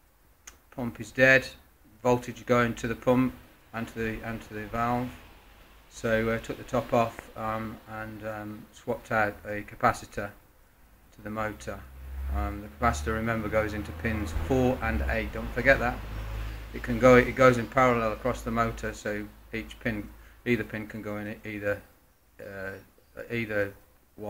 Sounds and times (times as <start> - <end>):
Speech: 0.7 - 5.2, 5.9 - 10.4, 11.2 - 11.8, 12.4 - 16.0, 16.8 - 24.2.